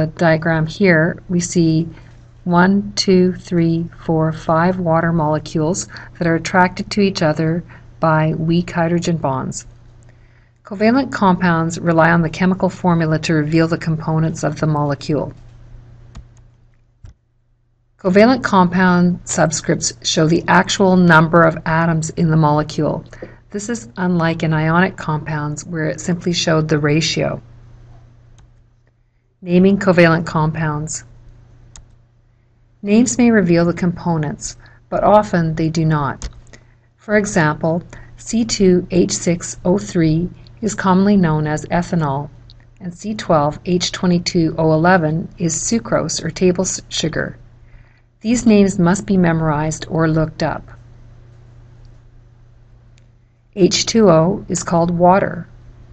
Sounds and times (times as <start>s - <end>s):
Speech: 0.0s - 9.7s, 10.7s - 15.4s, 18.0s - 27.4s, 29.4s - 31.1s, 32.8s - 36.3s, 37.0s - 47.4s, 48.2s - 50.8s, 53.6s - 55.5s.